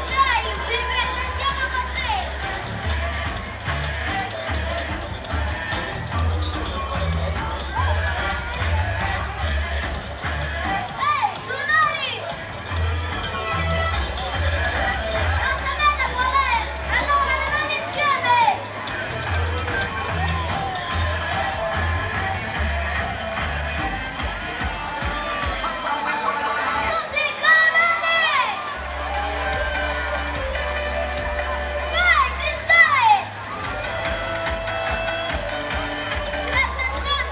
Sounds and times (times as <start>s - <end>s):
Speech: 0.0s - 2.6s, 10.7s - 12.4s, 14.2s - 18.8s, 31.8s - 33.3s, 36.3s - 37.3s
Music: 0.0s - 37.3s.